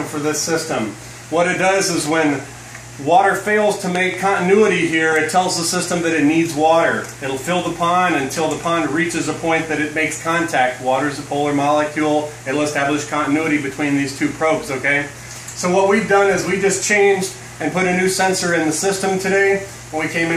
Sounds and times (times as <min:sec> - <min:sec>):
Speech: 0:00.0 - 0:20.3.